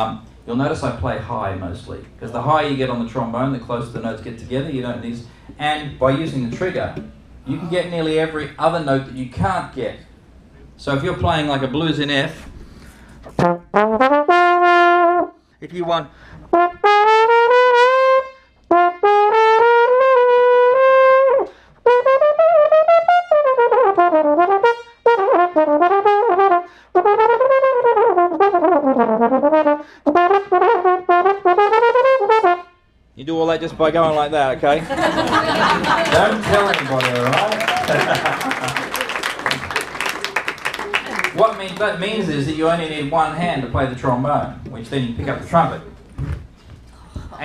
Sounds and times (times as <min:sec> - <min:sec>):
Speech: 0:00.0 - 0:10.1, 0:10.8 - 0:12.4, 0:15.6 - 0:16.1, 0:33.2 - 0:34.9, 0:36.0 - 0:37.7, 0:41.4 - 0:45.9
Music: 0:13.4 - 0:15.4, 0:16.5 - 0:32.8.